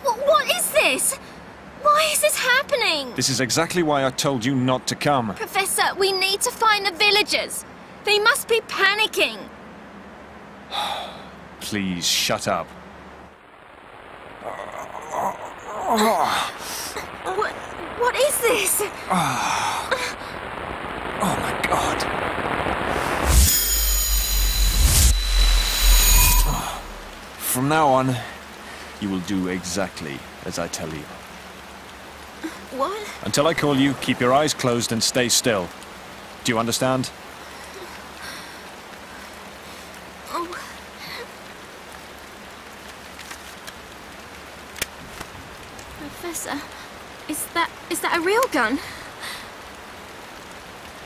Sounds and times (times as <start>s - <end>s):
Speech: 1.8s - 9.5s.